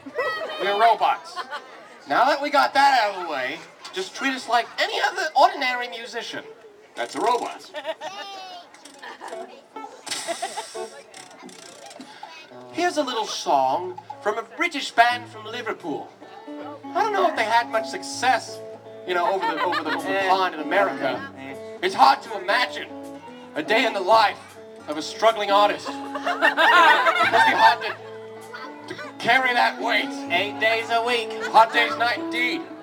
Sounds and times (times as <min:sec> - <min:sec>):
Hiss: 0:10.1 - 0:11.0
Music: 0:12.5 - 0:32.8.